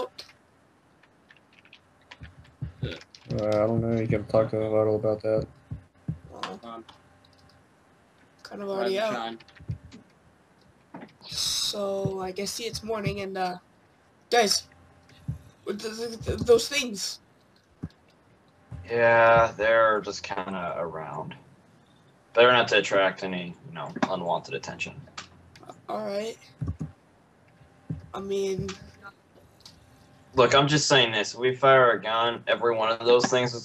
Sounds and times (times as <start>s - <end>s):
Speech: 0.0s - 0.2s, 2.8s - 5.4s, 6.3s - 6.8s, 8.5s - 9.4s, 11.2s - 13.6s, 14.3s - 14.6s, 15.7s - 17.2s, 18.9s - 21.4s, 22.4s - 25.0s, 25.6s - 26.8s, 28.2s - 29.1s, 30.4s - 33.6s.